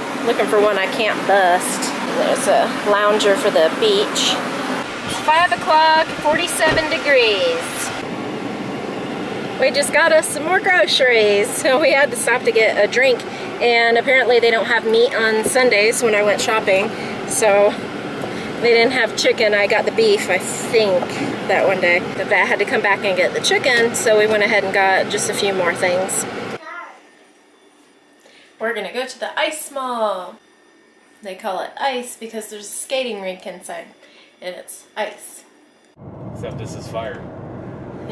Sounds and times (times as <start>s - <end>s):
Speech: 0.2s - 4.4s, 5.1s - 7.9s, 9.6s - 17.8s, 18.6s - 27.0s, 36.4s - 37.2s.